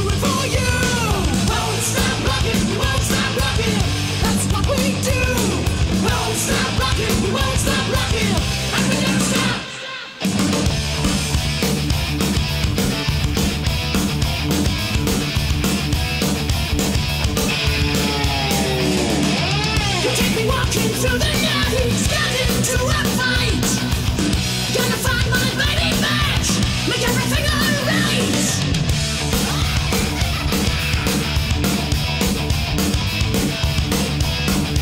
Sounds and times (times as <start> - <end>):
Heavy metal: 0.0 - 34.8
Punk rock: 0.0 - 34.8.